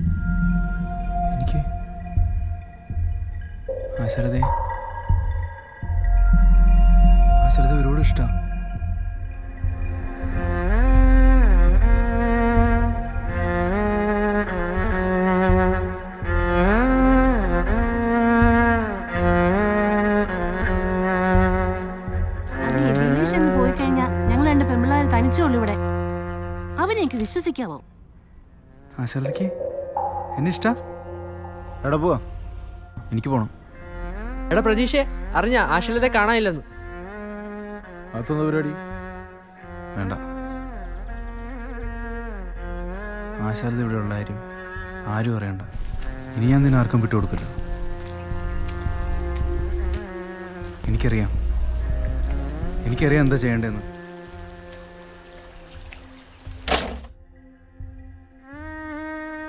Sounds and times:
Raindrop: 45.7 - 56.9.

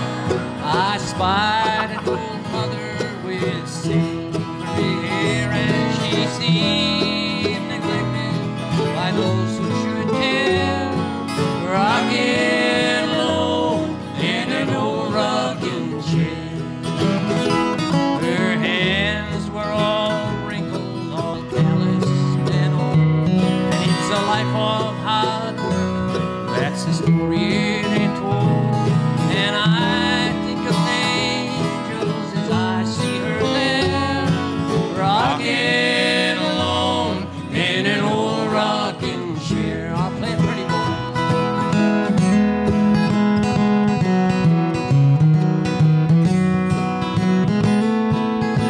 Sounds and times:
Music: 0.0 - 48.6.

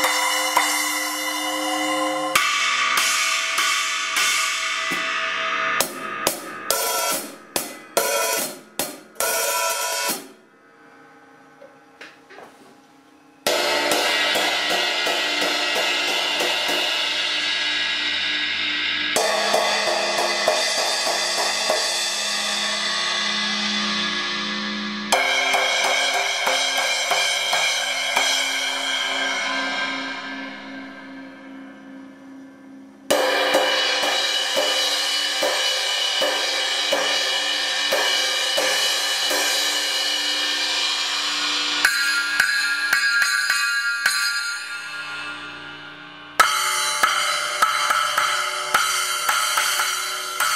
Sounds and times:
Music: 0.0 - 50.5.

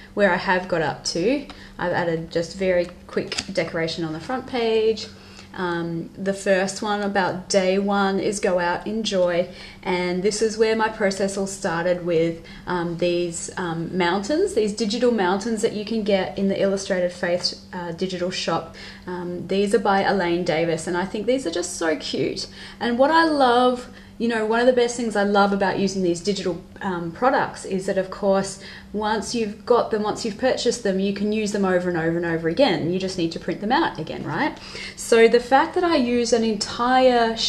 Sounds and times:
Speech: 0.2 - 37.4.

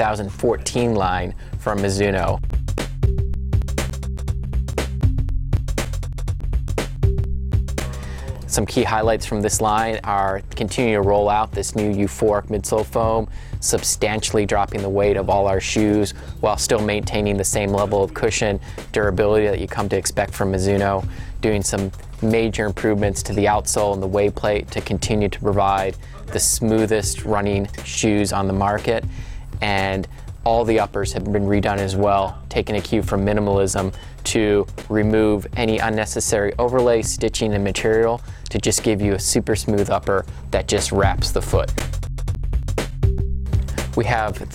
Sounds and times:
Speech: 0.0 - 2.4, 8.2 - 29.0, 29.6 - 41.8, 43.9 - 44.5
Music: 0.0 - 44.5.

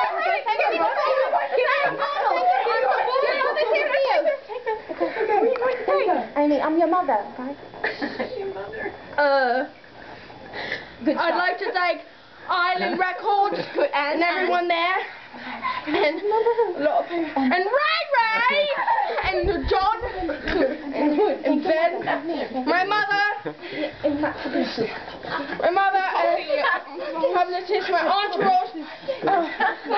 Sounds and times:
Female speech, woman speaking: 0.0 - 7.6, 8.2 - 9.8, 11.0 - 15.2, 15.9 - 29.5
Conversation: 0.0 - 29.9.

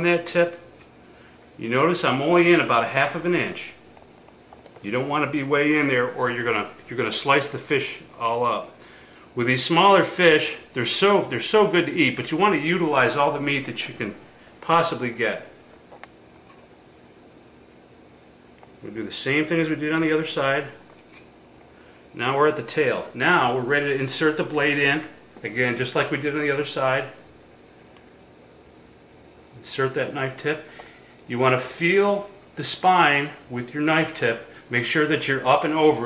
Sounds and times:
Speech: 0.0 - 0.7, 1.6 - 3.8, 4.8 - 8.8, 9.4 - 15.6, 18.8 - 20.8, 22.2 - 27.2, 29.6 - 30.7, 31.3 - 36.0.

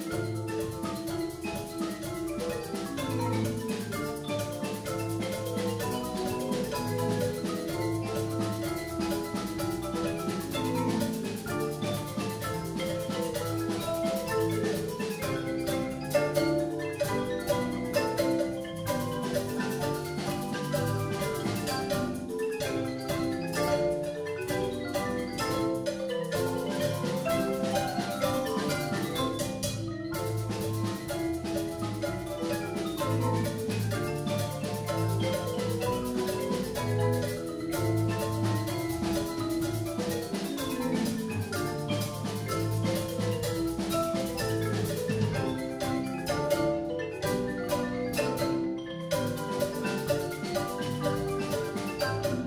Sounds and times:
Vibraphone: 0.0 - 52.4.

